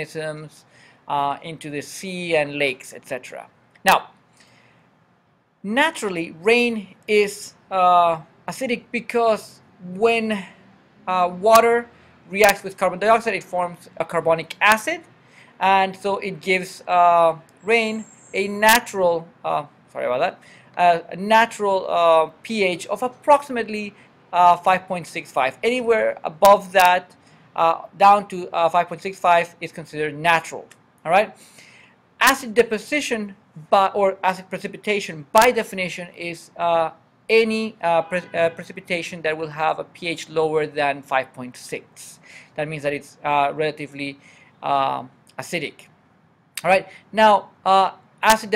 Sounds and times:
Speech: 0:00.0 - 0:04.2, 0:05.7 - 0:31.4, 0:32.2 - 0:45.9, 0:46.6 - 0:48.5.

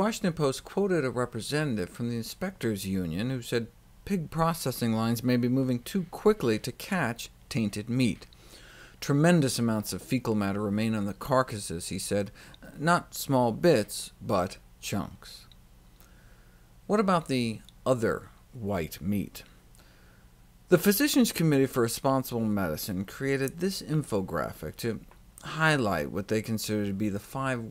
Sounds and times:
Speech: 0:00.0 - 0:08.3, 0:09.0 - 0:15.5, 0:16.9 - 0:19.5, 0:20.7 - 0:27.7.

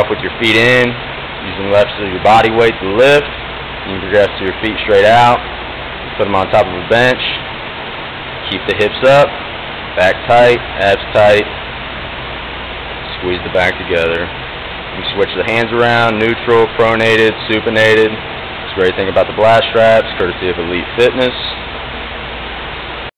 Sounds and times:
Speech: 0:00.0 - 0:03.3, 0:03.9 - 0:05.5, 0:06.2 - 0:07.5, 0:08.5 - 0:09.4, 0:10.0 - 0:11.5, 0:13.1 - 0:14.3, 0:15.0 - 0:21.6.

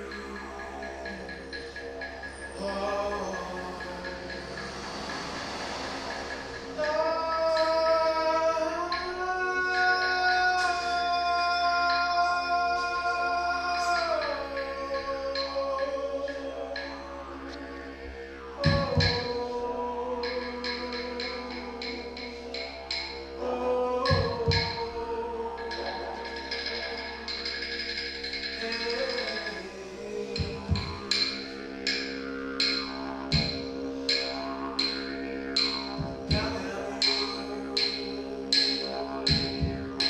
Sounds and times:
Wind instrument, woodwind instrument: 0:00.0 - 0:40.1.

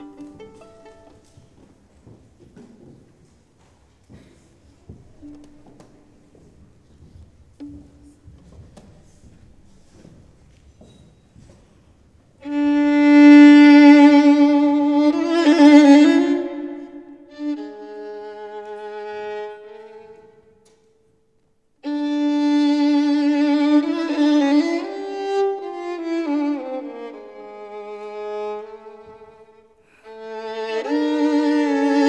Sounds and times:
Violin, fiddle: 0:00.0 - 0:01.8, 0:12.4 - 0:20.9, 0:21.8 - 0:32.0.

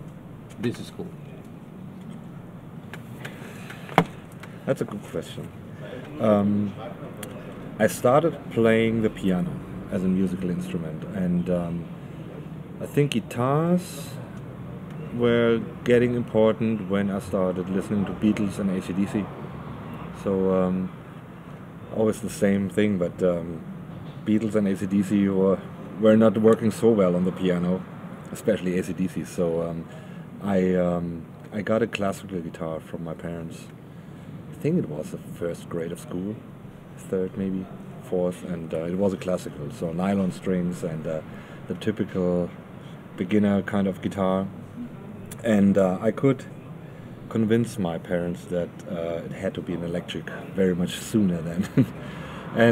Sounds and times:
Speech: 0:00.6 - 0:01.2, 0:04.7 - 0:11.9, 0:12.8 - 0:14.3, 0:15.1 - 0:19.3, 0:20.2 - 0:21.0, 0:21.9 - 0:33.7, 0:34.5 - 0:42.6, 0:43.2 - 0:46.6, 0:47.3 - 0:51.9.

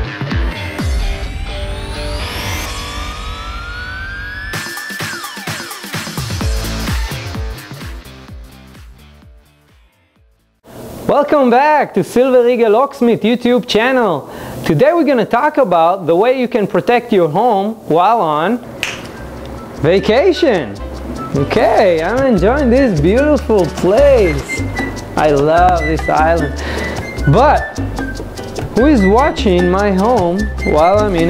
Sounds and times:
Music: 0:00.0 - 0:10.7, 0:18.9 - 0:31.3
Speech: 0:11.1 - 0:18.6, 0:19.8 - 0:20.8, 0:21.4 - 0:24.5, 0:25.2 - 0:26.5, 0:27.3 - 0:27.7, 0:28.8 - 0:31.3.

